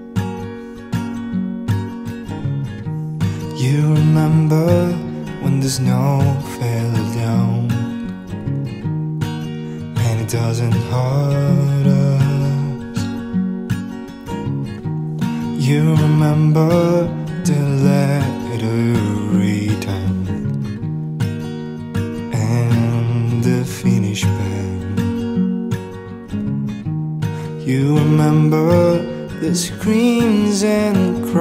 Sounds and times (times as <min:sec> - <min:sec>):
Music: 0:00.0 - 0:31.4.